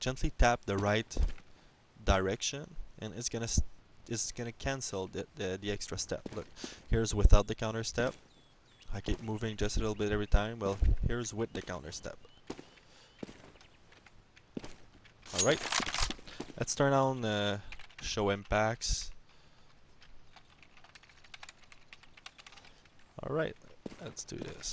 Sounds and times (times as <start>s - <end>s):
Speech: 0.0s - 1.3s, 2.0s - 8.2s, 8.9s - 12.2s, 16.6s - 19.2s, 23.2s - 24.7s.